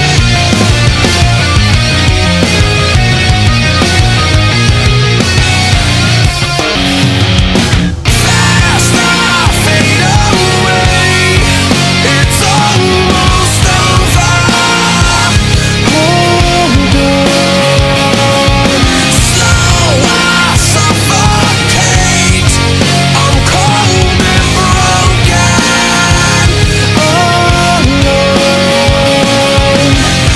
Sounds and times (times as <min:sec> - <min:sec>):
Music: 0:00.0 - 0:30.3.